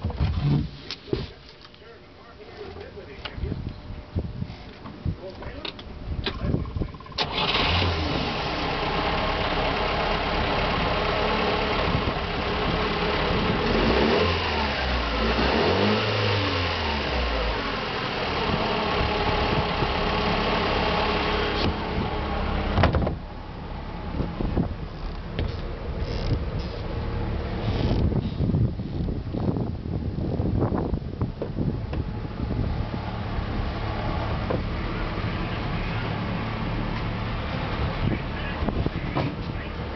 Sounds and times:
Boat, Water vehicle: 22.8s - 28.2s, 31.3s - 39.9s.

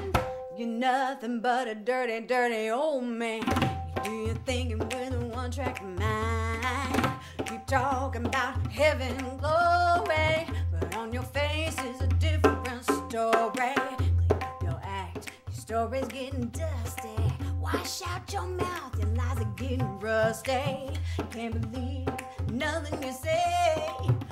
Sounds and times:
Music: 0.0s - 0.6s, 3.4s - 24.3s.

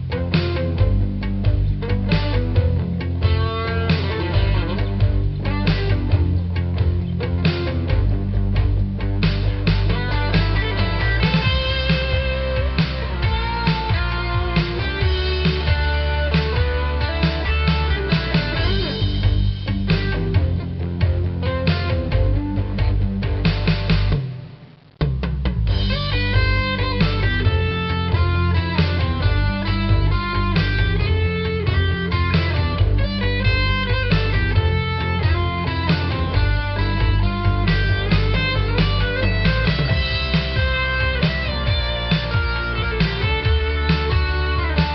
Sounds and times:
Music: 0.0s - 44.9s.

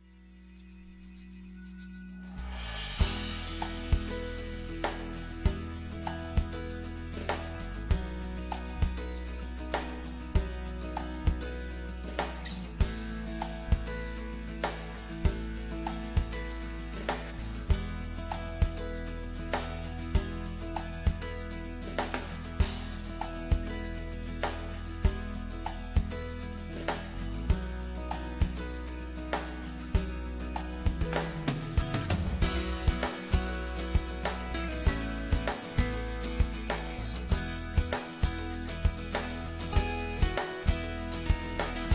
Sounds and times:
Music: 0.0s - 41.9s.

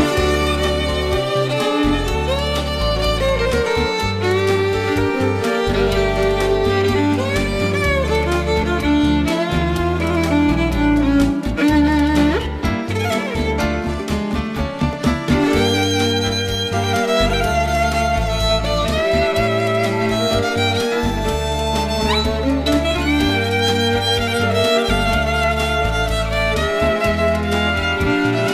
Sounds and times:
Violin, fiddle: 0.0s - 28.5s.

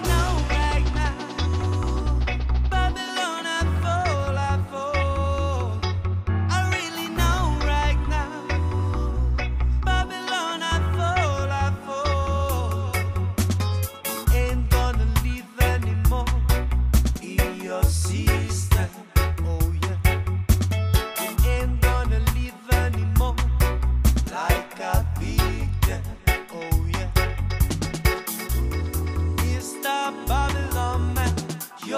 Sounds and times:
Music: 0.0s - 31.9s.

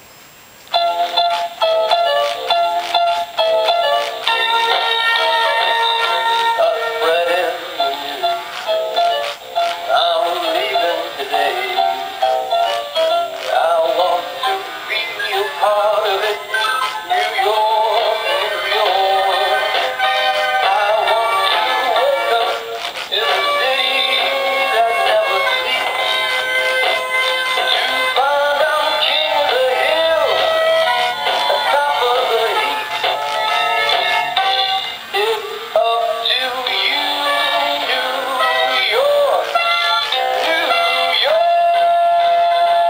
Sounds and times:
Music: 0.7s - 42.8s
Synthetic singing: 4.0s - 9.1s, 9.7s - 30.6s, 31.2s - 33.1s, 34.5s - 42.8s.

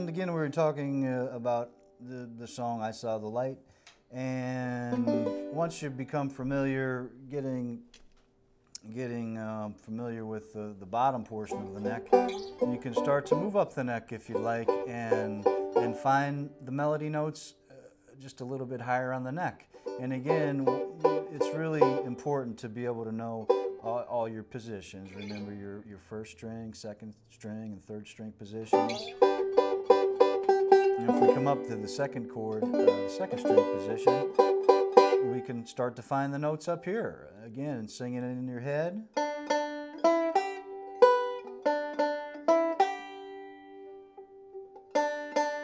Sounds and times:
Mandolin: 0.0s - 3.5s, 4.2s - 8.2s, 8.8s - 25.8s, 28.5s - 36.9s, 38.5s - 45.6s
Speech: 0.0s - 7.9s, 8.8s - 29.2s, 31.0s - 34.3s, 35.2s - 39.1s.

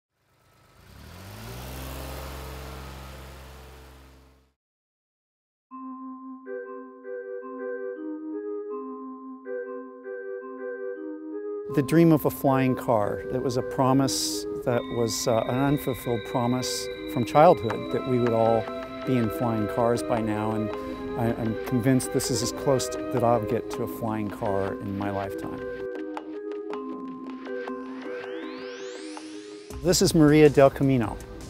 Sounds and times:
Car: 0.1s - 4.6s, 12.7s - 25.6s, 29.8s - 31.4s
Vibraphone: 5.7s - 30.0s.

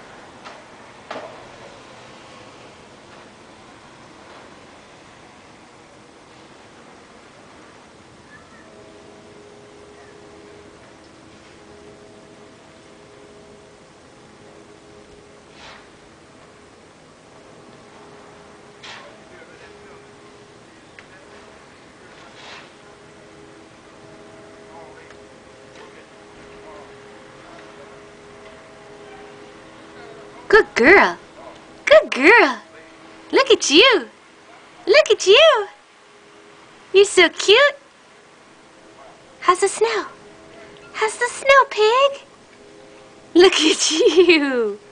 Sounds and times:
Speech: 31.9s - 32.8s, 33.4s - 34.1s, 34.9s - 35.8s, 37.0s - 37.8s, 41.0s - 42.2s, 43.4s - 44.8s.

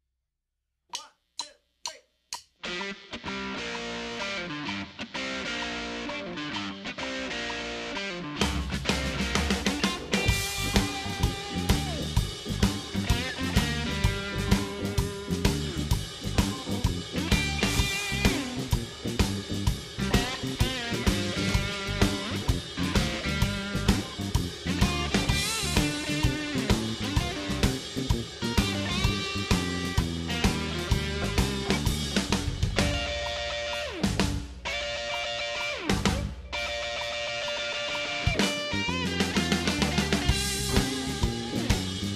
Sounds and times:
Drum kit: 7.2s - 42.1s
Drum: 8.4s - 42.1s.

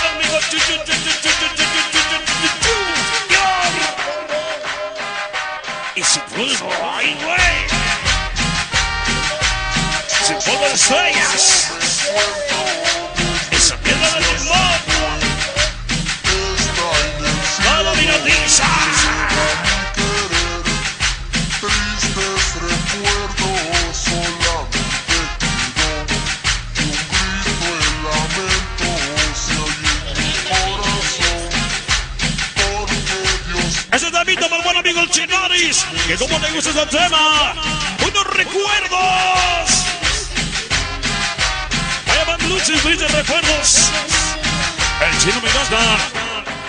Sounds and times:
Music: 0.0s - 46.6s.

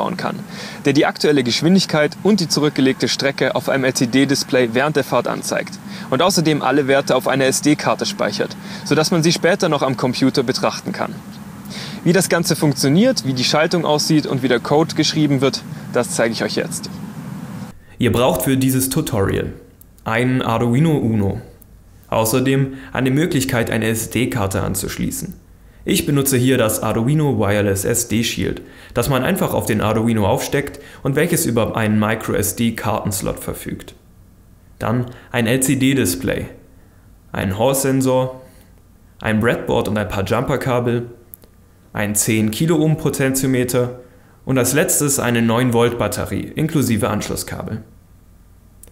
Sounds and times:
Speech: 0.0s - 11.2s, 12.0s - 17.0s, 18.0s - 34.0s, 34.8s - 36.6s, 37.3s - 38.5s, 39.2s - 41.2s, 42.0s - 47.9s.

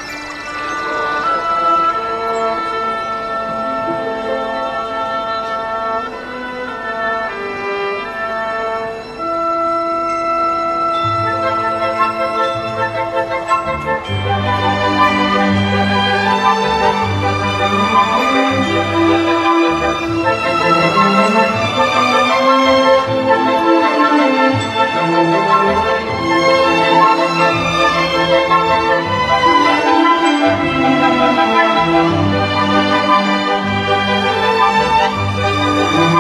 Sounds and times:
Music: 0.0s - 36.2s.

